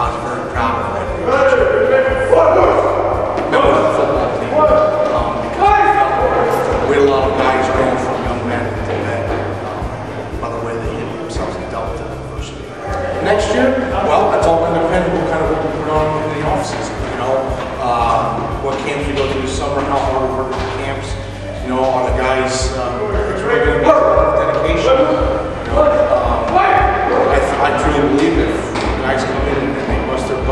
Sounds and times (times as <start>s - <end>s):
Speech: 0.0s - 9.4s, 10.4s - 30.5s.